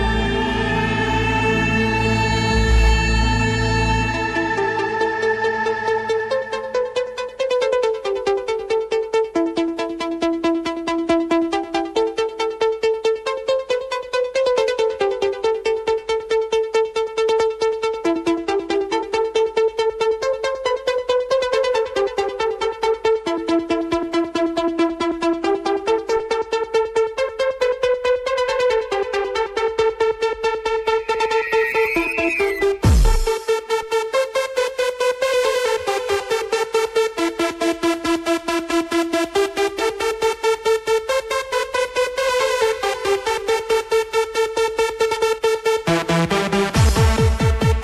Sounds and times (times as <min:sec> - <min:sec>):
Techno: 0:24.9 - 0:47.8.